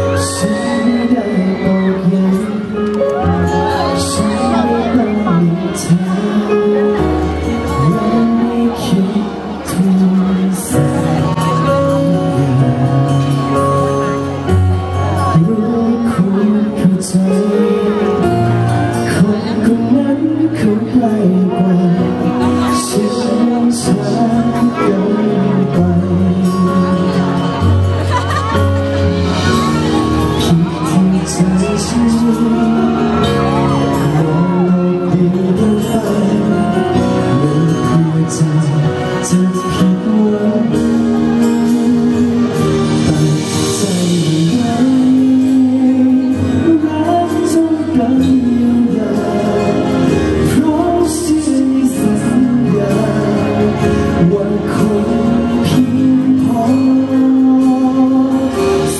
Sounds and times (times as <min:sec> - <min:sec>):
Music: 0:00.0 - 0:58.9.